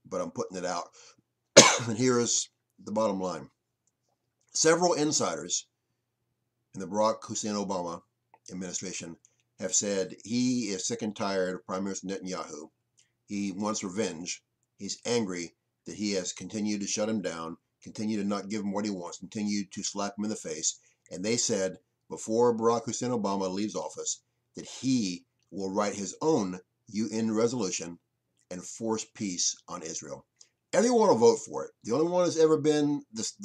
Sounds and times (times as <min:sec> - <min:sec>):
Speech: 0:00.0 - 0:01.0, 0:01.8 - 0:03.5, 0:04.6 - 0:05.7, 0:06.8 - 0:12.7, 0:13.3 - 0:30.2, 0:30.8 - 0:33.4.